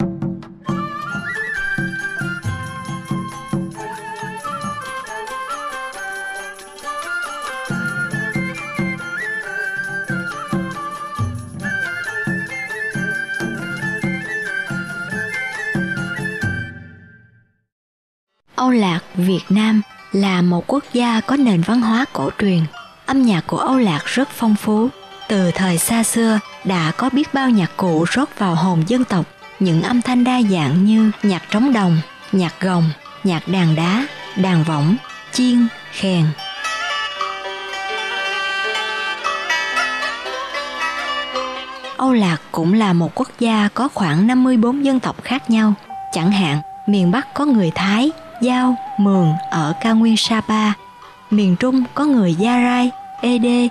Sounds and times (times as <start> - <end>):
Percussion: 0.0 - 17.3, 18.6 - 53.7.